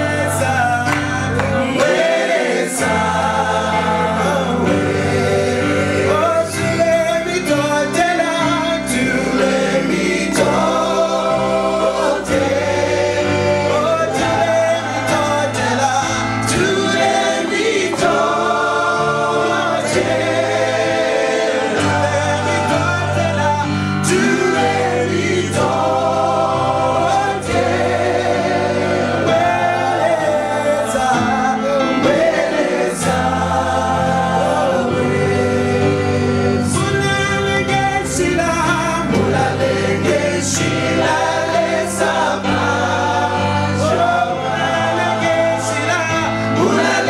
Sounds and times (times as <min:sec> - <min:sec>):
Singing: 0:00.0 - 0:47.0
Vocal music: 0:00.0 - 0:47.0.